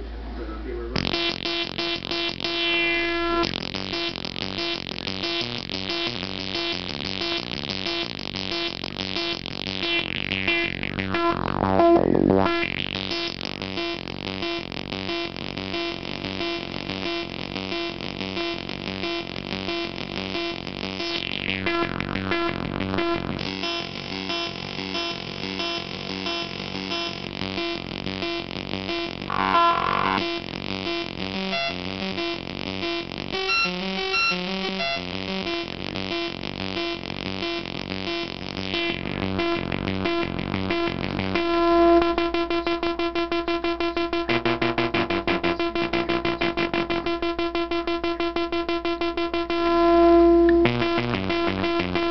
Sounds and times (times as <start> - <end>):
Sampler: 1.0 - 52.1.